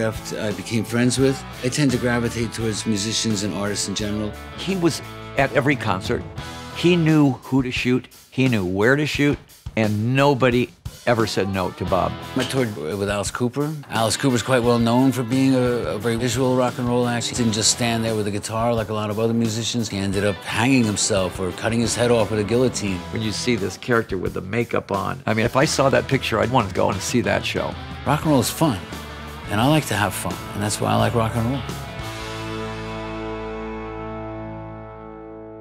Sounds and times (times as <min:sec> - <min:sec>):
Speech: 0:00.0 - 0:31.7
Rock and roll: 0:00.0 - 0:35.6.